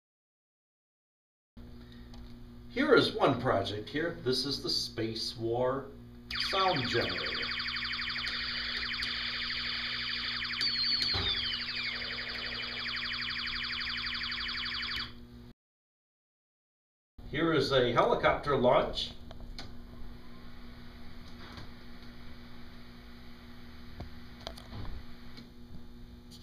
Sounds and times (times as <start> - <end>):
Speech: 2.8 - 7.4, 17.3 - 19.2.